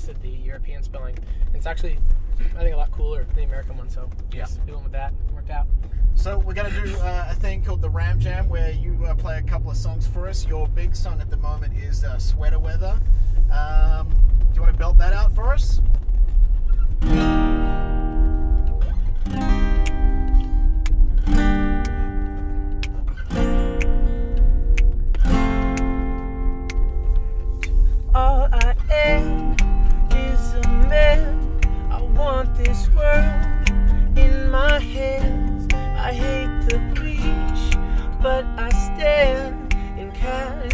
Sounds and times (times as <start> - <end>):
Speech: 0.0 - 15.8
Acoustic guitar: 0.0 - 40.7.